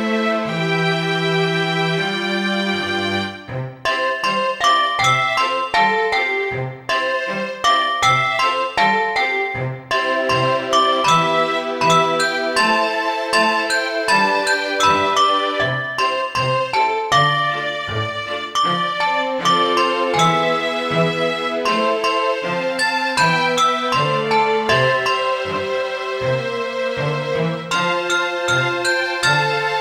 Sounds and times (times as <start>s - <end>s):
Music: 0.0s - 29.8s.